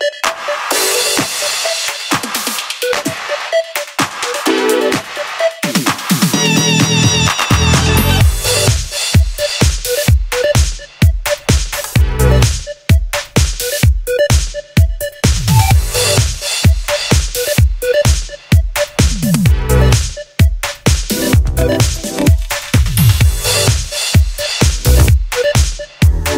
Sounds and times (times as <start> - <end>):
Music: 0.0 - 26.3.